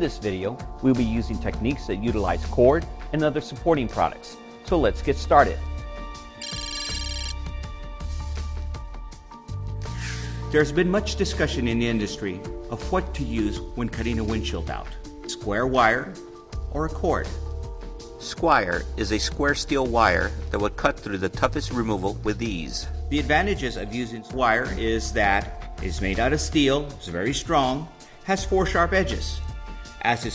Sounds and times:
Speech: 0.0 - 5.6, 10.5 - 17.4, 18.2 - 30.3
Music: 0.0 - 30.3.

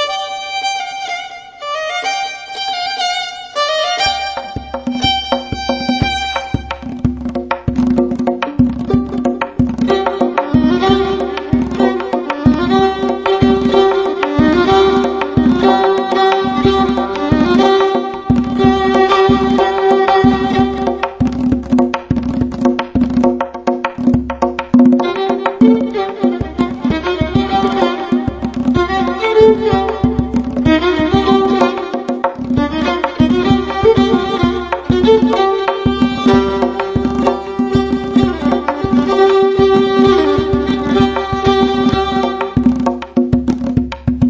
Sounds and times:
Violin, fiddle: 0.0 - 7.1, 8.4 - 21.8, 24.8 - 43.1.

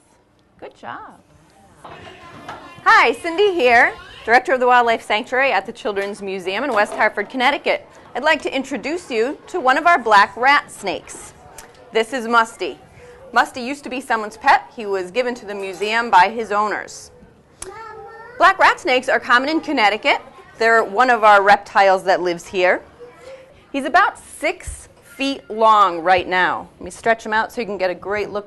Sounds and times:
Inside, small room: 0.0 - 28.4.

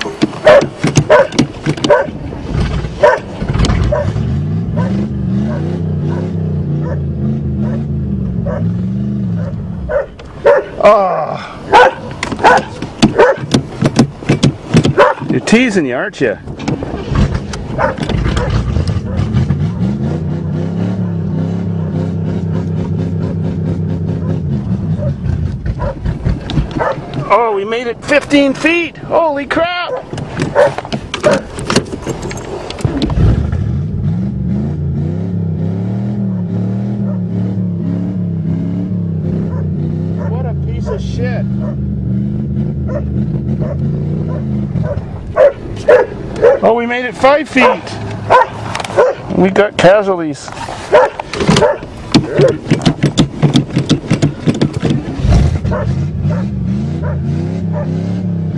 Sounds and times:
Car: 0.0 - 58.5
Speech: 15.3 - 16.4, 27.2 - 30.0, 40.3 - 41.5, 46.6 - 48.0, 49.3 - 50.5.

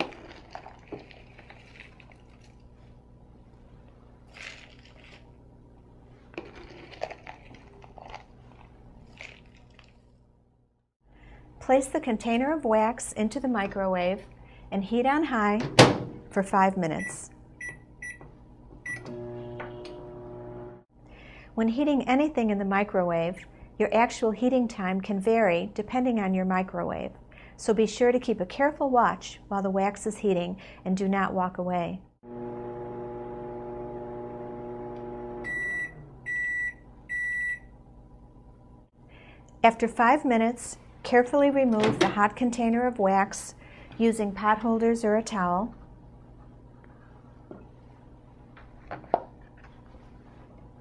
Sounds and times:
Speech: 11.6 - 15.7, 16.4 - 17.3, 21.6 - 32.0, 39.6 - 45.8.

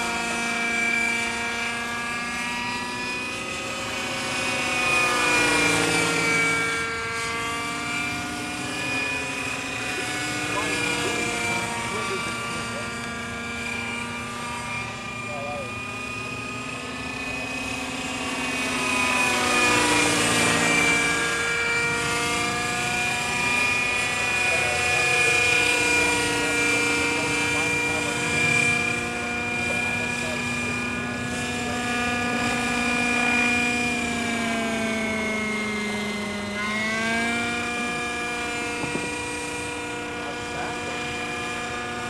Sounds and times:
Engine: 0.0 - 42.0
Vehicle: 0.0 - 42.0
Speech: 15.3 - 15.7, 29.6 - 30.6.

